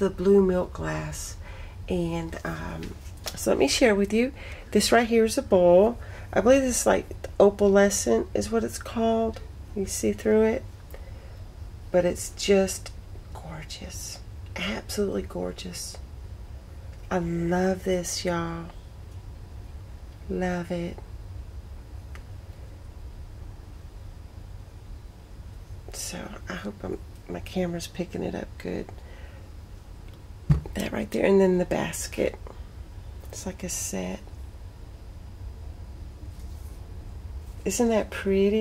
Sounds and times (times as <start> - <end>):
Speech: 0.0 - 10.7, 11.9 - 16.0, 17.1 - 18.8, 20.3 - 21.0, 25.9 - 29.0, 30.7 - 32.5, 33.3 - 34.3, 37.7 - 38.6.